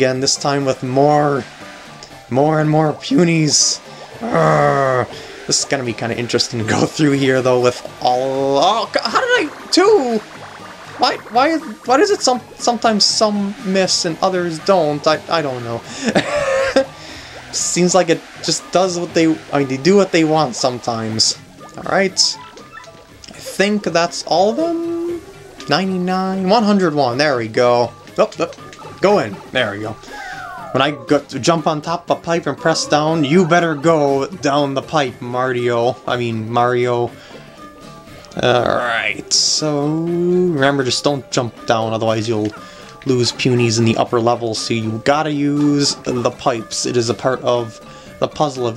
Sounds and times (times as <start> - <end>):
Speech: 0.0 - 1.5, 2.3 - 10.2, 11.0 - 15.9, 17.5 - 22.4, 23.3 - 30.0, 30.7 - 37.1, 38.4 - 48.7
Music: 0.0 - 48.7.